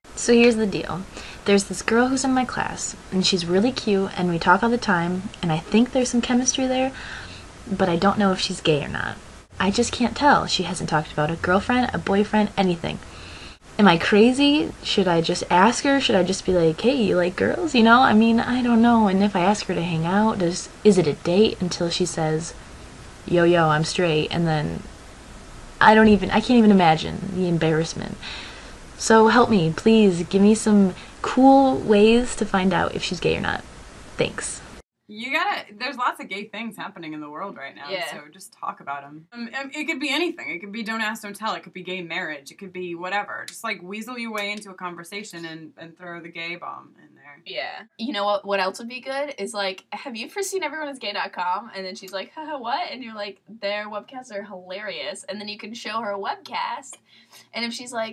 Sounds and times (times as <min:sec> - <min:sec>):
Narration, monologue: 0:00.0 - 0:58.1.